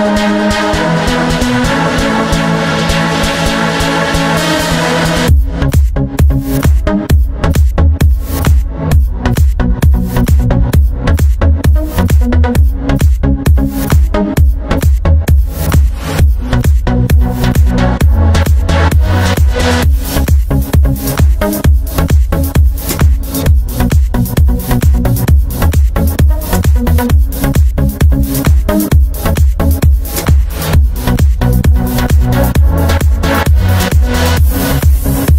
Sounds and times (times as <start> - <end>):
Music: 0.0 - 35.3.